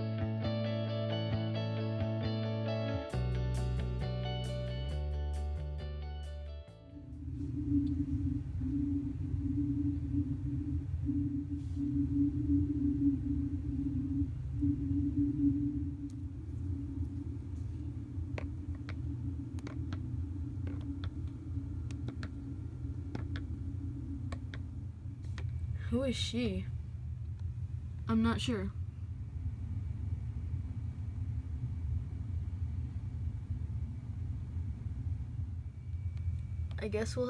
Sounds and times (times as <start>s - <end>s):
Speech: 25.8s - 26.7s, 28.1s - 28.8s, 36.8s - 37.2s.